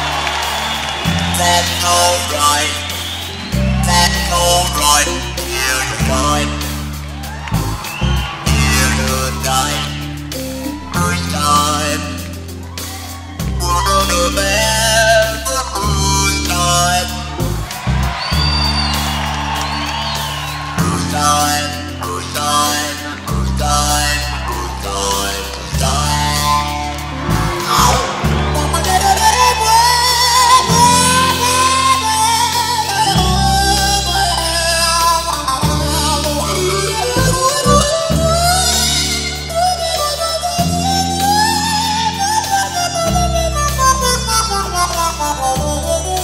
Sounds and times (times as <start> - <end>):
Guitar: 0.0 - 46.2
Heavy metal: 0.0 - 46.2.